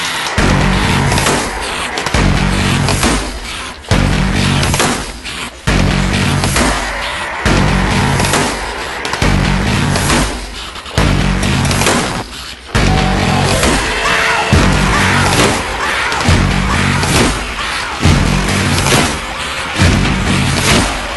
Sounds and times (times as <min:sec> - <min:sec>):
Music: 0:00.0 - 0:21.1.